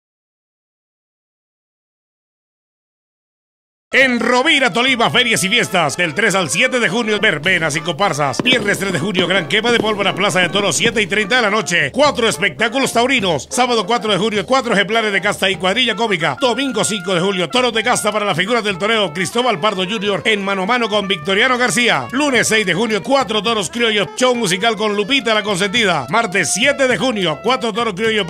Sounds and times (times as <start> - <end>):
Music: 3.9 - 28.3
Speech: 4.0 - 28.3.